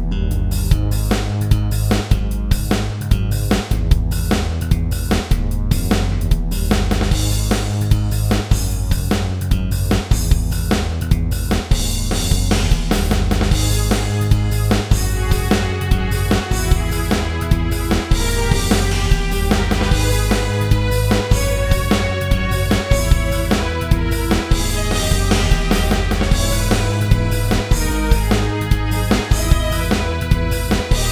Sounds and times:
Soundtrack music: 0:00.0 - 0:11.5, 0:12.1 - 0:31.1
Blues: 0:00.0 - 0:31.1.

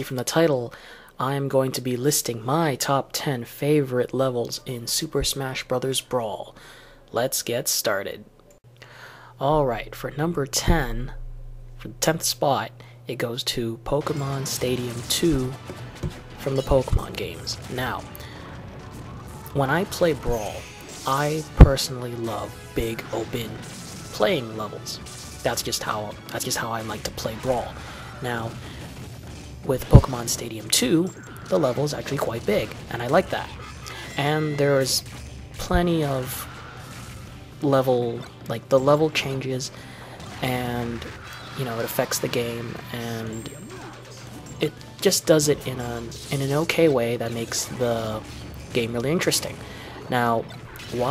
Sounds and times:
Speech: 0:00.0 - 0:08.3, 0:09.4 - 0:11.2, 0:11.8 - 0:15.6, 0:16.4 - 0:18.1, 0:19.5 - 0:28.6, 0:29.6 - 0:35.0, 0:35.6 - 0:36.5, 0:37.6 - 0:51.1.

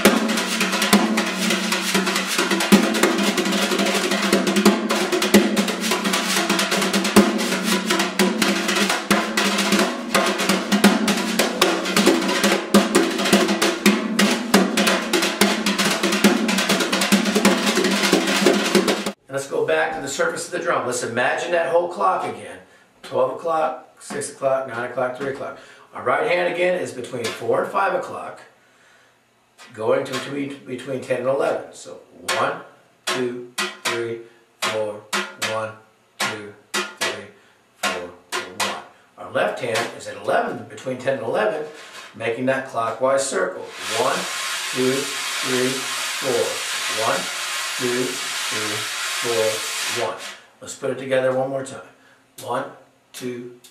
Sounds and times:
Percussion: 0:00.0 - 0:19.2, 0:32.3 - 0:35.6, 0:36.2 - 0:37.2, 0:37.8 - 0:38.9, 0:43.7 - 0:50.4
Speech: 0:19.2 - 0:28.5, 0:29.6 - 0:44.2, 0:44.8 - 0:53.6.

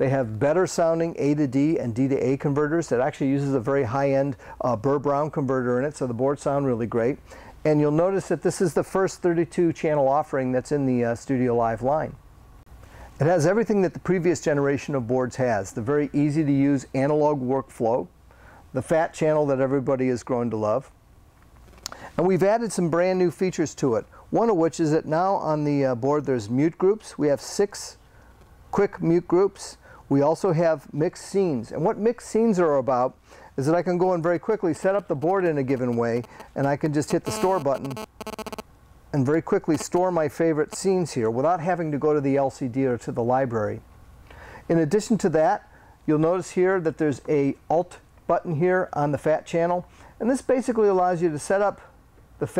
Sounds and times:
Speech: 0:00.0 - 0:12.2, 0:13.2 - 0:18.1, 0:18.7 - 0:21.0, 0:22.2 - 0:28.0, 0:28.7 - 0:38.0, 0:39.1 - 0:43.8, 0:44.7 - 0:52.5.

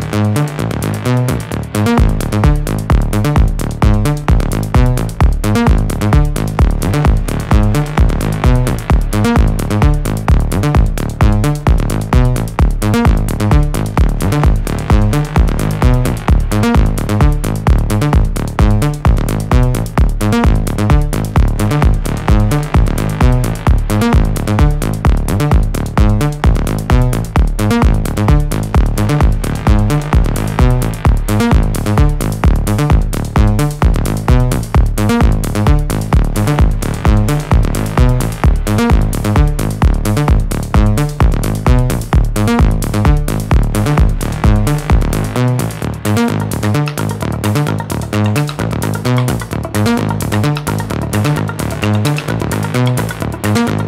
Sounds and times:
Sampler: 0:00.0 - 0:53.8.

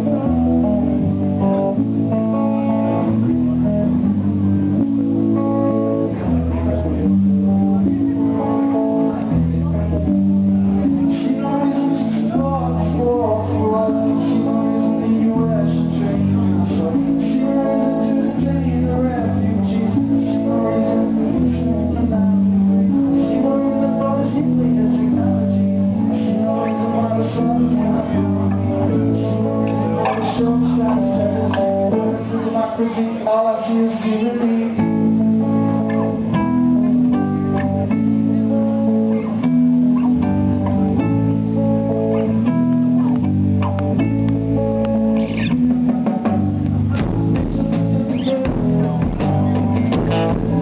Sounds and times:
Music: 0:00.0 - 0:50.6
Singing: 0:11.0 - 0:35.0.

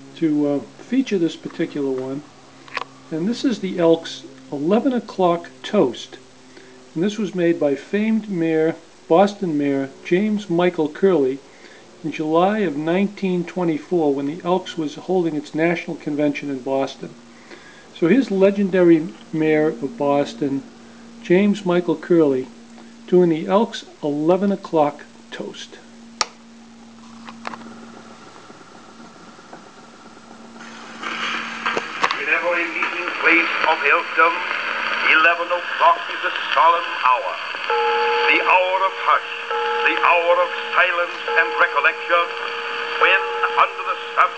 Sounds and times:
Speech: 0:00.2 - 0:02.3, 0:03.1 - 0:06.2, 0:07.0 - 0:11.4, 0:12.0 - 0:17.2, 0:18.0 - 0:22.5, 0:23.1 - 0:25.9, 0:32.2 - 0:37.4, 0:38.3 - 0:42.3, 0:43.0 - 0:44.3.

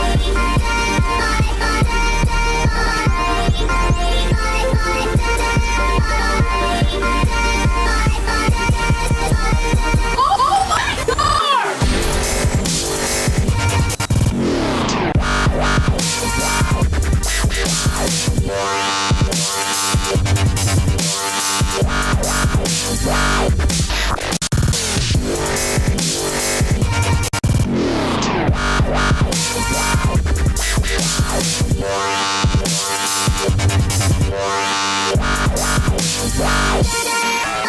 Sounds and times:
Dubstep: 0:00.0 - 0:37.6.

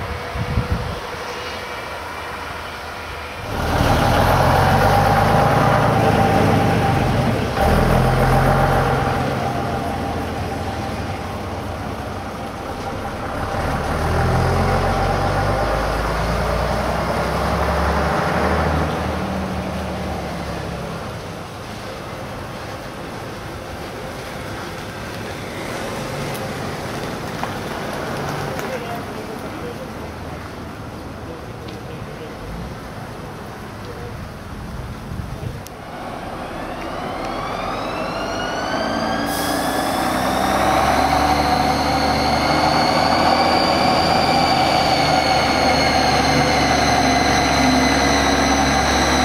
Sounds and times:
Bus: 0:00.0 - 0:49.2
Outside, urban or manmade: 0:00.0 - 0:49.2
Air brake: 0:39.2 - 0:40.1.

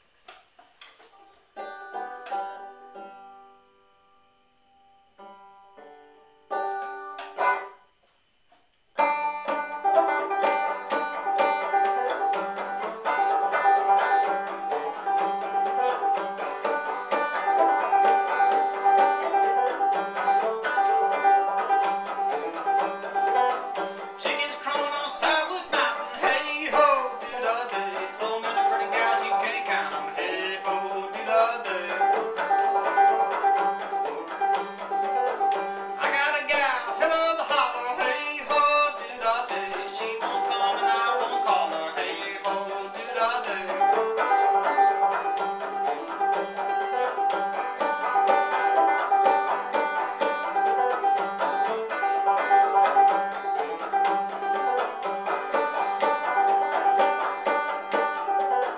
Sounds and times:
Banjo: 0:00.0 - 0:04.2, 0:05.1 - 0:07.9, 0:09.0 - 0:58.7.

